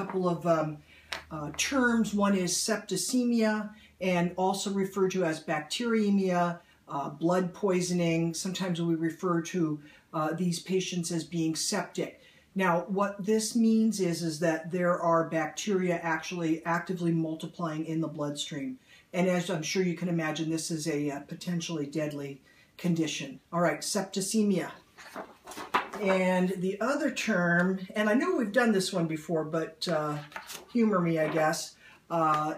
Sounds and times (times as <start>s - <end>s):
Speech: 0.0s - 24.8s, 26.0s - 32.5s.